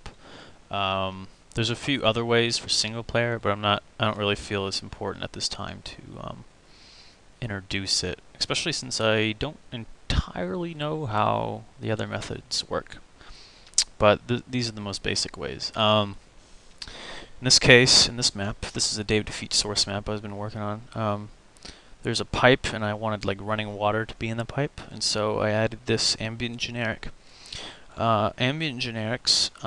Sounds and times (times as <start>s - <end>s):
Speech: 0.7s - 6.5s, 7.4s - 13.0s, 13.8s - 16.2s, 17.4s - 21.3s, 22.0s - 27.1s, 28.0s - 29.6s.